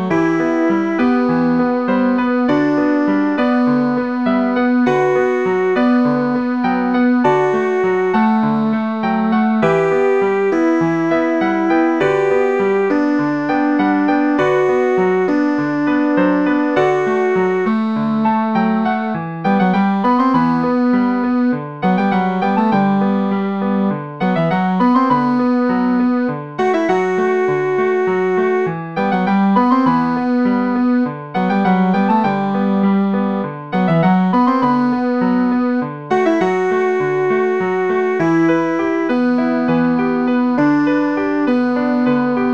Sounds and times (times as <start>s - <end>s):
Musical instrument: 0.0s - 42.5s.